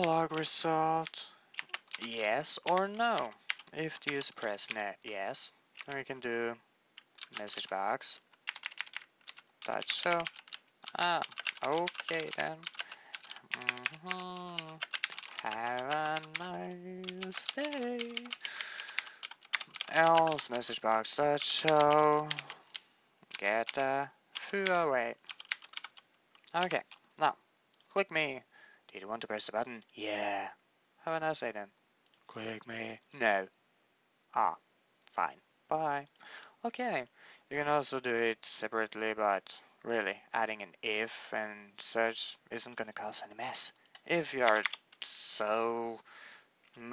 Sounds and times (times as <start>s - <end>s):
Speech: 0.0s - 1.4s, 2.0s - 6.6s, 7.4s - 8.2s, 9.7s - 10.3s, 10.9s - 12.7s, 13.6s - 14.8s, 15.4s - 18.4s, 19.9s - 22.5s, 23.4s - 25.2s, 26.5s - 31.7s, 32.3s - 33.5s, 34.4s - 46.0s
Typing: 0.0s - 6.3s, 7.0s - 27.0s, 43.6s - 45.4s.